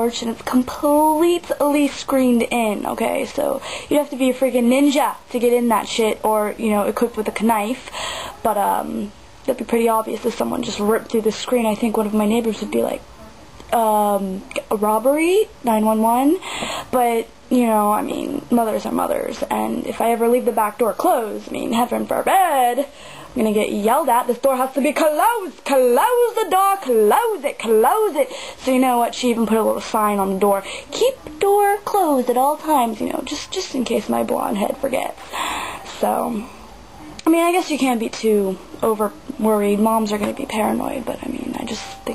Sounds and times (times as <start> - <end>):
Speech: 0.0 - 35.2, 35.9 - 36.5, 37.1 - 42.1.